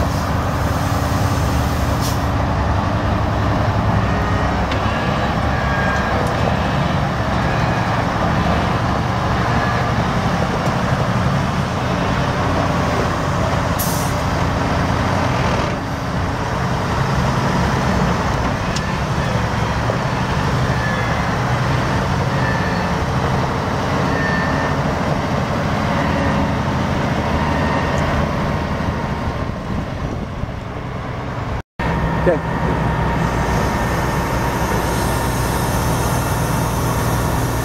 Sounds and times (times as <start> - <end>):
Truck: 0.0 - 37.6.